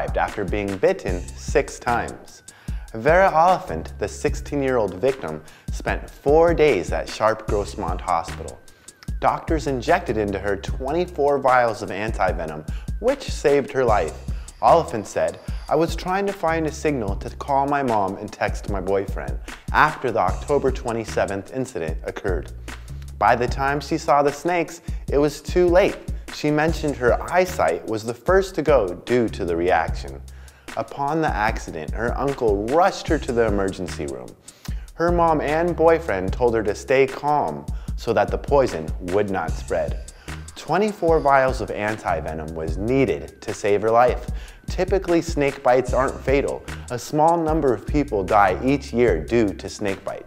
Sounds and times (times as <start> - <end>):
Speech: 0.0 - 22.5, 23.2 - 30.2, 30.8 - 34.4, 35.0 - 40.0, 40.6 - 50.2
Music: 0.0 - 50.2.